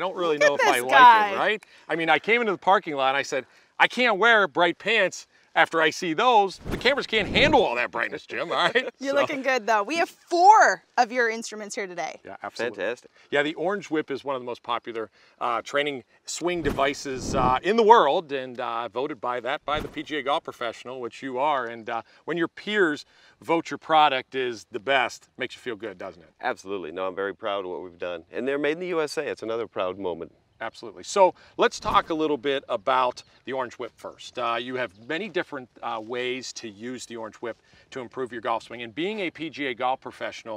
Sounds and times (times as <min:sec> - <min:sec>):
Speech: 0:00.0 - 0:40.5.